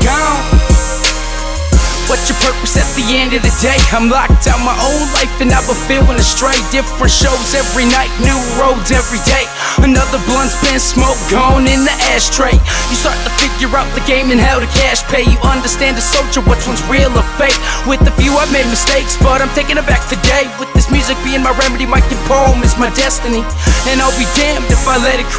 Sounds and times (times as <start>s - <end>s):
Soundtrack music: 0.0s - 25.3s.